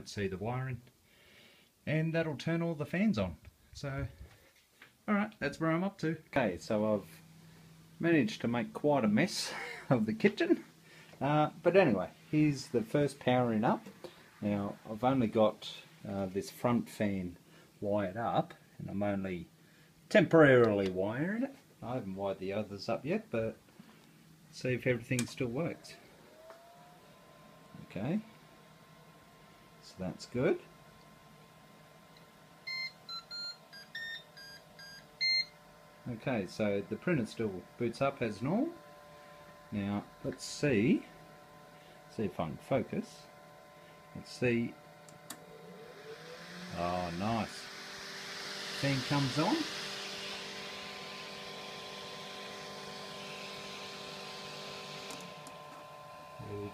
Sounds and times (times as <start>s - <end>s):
Speech: 0.0s - 0.9s, 1.8s - 4.2s, 5.1s - 7.2s, 8.0s - 19.5s, 20.1s - 23.6s, 24.5s - 26.0s, 27.8s - 28.3s, 29.8s - 30.7s, 36.0s - 38.8s, 39.7s - 41.1s, 42.1s - 43.3s, 44.2s - 44.8s, 46.7s - 47.6s, 48.8s - 49.7s, 56.4s - 56.7s.